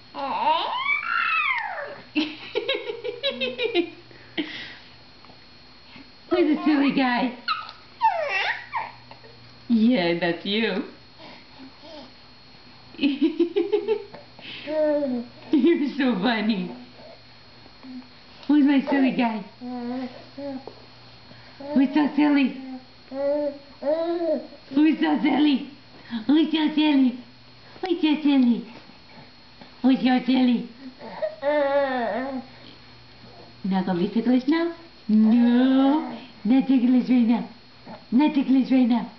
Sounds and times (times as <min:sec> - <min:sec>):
Inside, small room: 0:00.0 - 0:39.1
Speech: 0:06.3 - 0:07.4, 0:09.7 - 0:11.0, 0:15.5 - 0:16.8, 0:18.5 - 0:19.6, 0:21.7 - 0:22.8, 0:24.7 - 0:28.8, 0:29.8 - 0:30.8, 0:33.6 - 0:39.1.